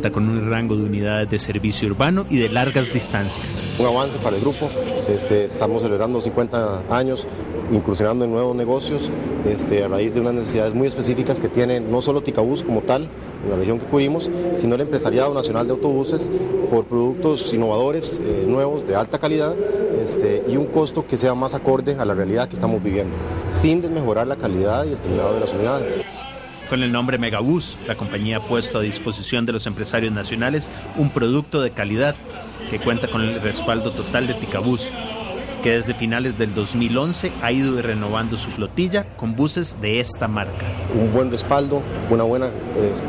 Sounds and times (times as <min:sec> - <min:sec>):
Speech: 0:00.0 - 0:43.0.